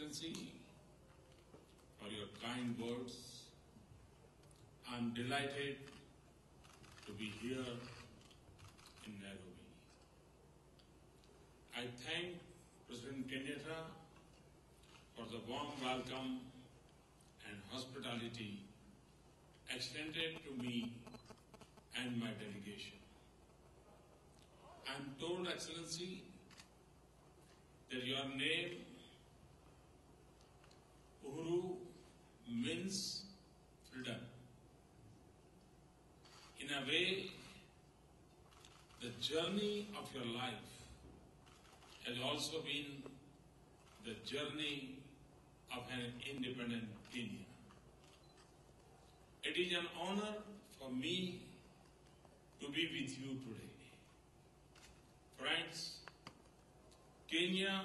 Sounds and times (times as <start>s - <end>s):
Male speech, man speaking: 0.0s - 0.7s, 2.0s - 3.6s, 4.8s - 5.9s, 7.1s - 8.0s, 9.0s - 9.8s, 11.7s - 14.1s, 15.2s - 16.5s, 17.4s - 18.7s, 19.7s - 21.0s, 22.0s - 23.0s, 24.8s - 26.3s, 27.9s - 29.0s, 31.2s - 31.9s, 32.5s - 33.3s, 33.9s - 34.4s, 36.6s - 37.6s, 39.0s - 41.0s, 42.0s - 43.2s, 44.0s - 45.0s, 45.7s - 47.6s, 49.4s - 51.6s, 52.6s - 54.0s, 55.4s - 56.0s, 57.3s - 57.8s
Narration, monologue: 0.0s - 57.8s.